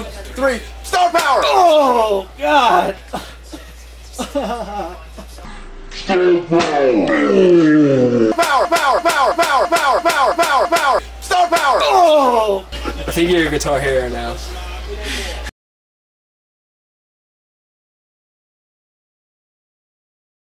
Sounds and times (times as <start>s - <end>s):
Speech: 6.1s - 15.5s.